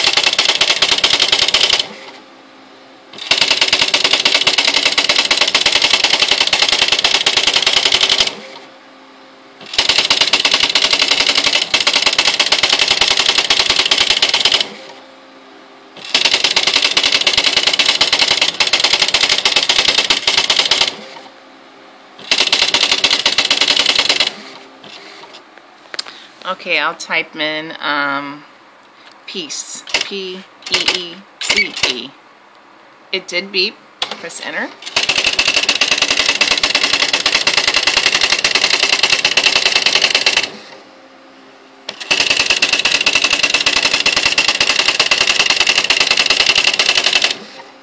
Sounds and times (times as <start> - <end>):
Typewriter: 0.0 - 1.9, 3.2 - 8.4, 9.7 - 14.7, 16.0 - 21.0, 22.3 - 24.4, 29.9 - 32.0, 34.8 - 40.6, 41.9 - 47.4.